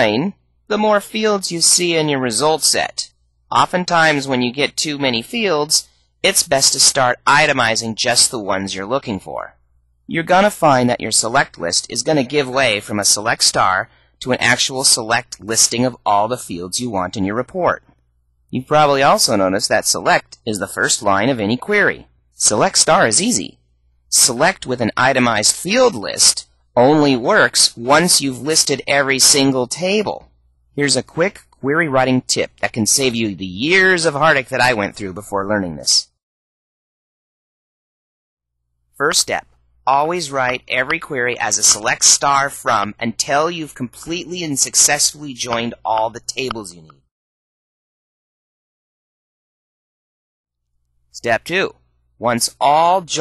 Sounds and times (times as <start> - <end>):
Speech: 0.0 - 17.9, 18.5 - 36.2, 39.0 - 47.1, 51.2 - 53.2.